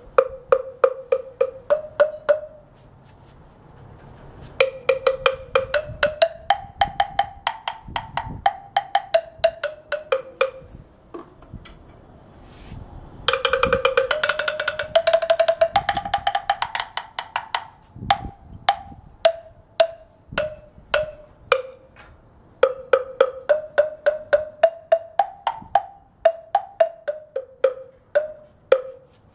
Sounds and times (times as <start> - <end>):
Wood block: 0.0 - 2.7, 4.6 - 11.8, 13.3 - 29.3.